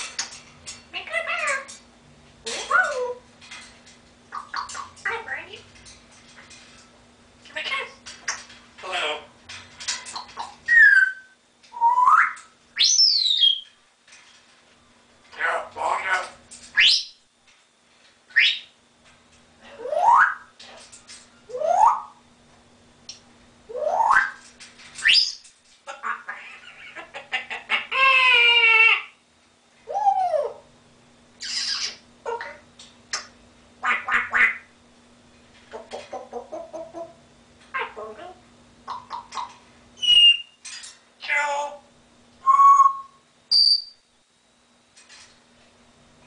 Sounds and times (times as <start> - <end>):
Speech: 0.9 - 1.8, 5.0 - 5.7, 7.5 - 8.0, 8.8 - 9.3, 15.4 - 16.4.